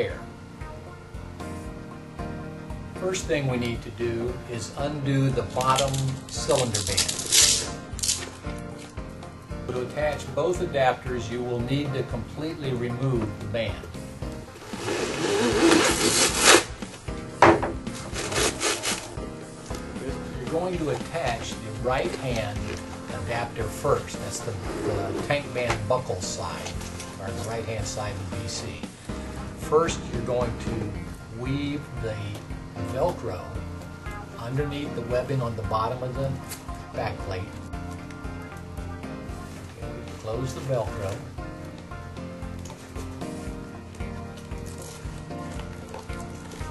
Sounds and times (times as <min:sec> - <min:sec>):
Music: 0:00.0 - 0:46.7
Speech: 0:20.0 - 0:28.9, 0:29.6 - 0:33.6, 0:40.2 - 0:41.2.